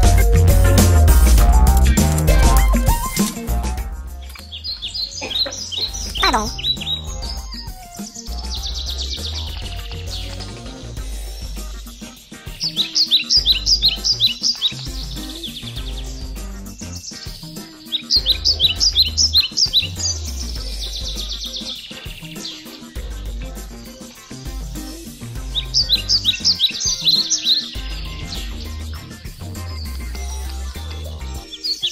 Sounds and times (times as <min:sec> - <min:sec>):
Music: 0:00.0 - 0:31.9
Animal: 0:04.3 - 0:31.9.